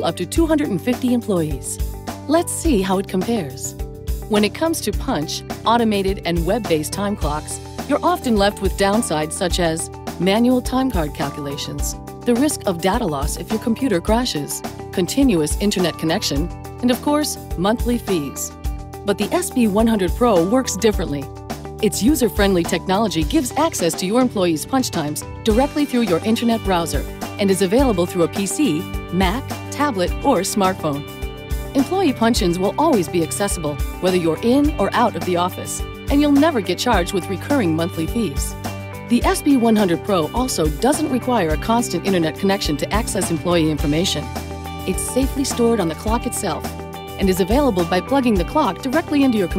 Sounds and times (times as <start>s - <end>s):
Speech: 0.0s - 31.1s, 31.7s - 49.5s
Music: 0.0s - 49.5s.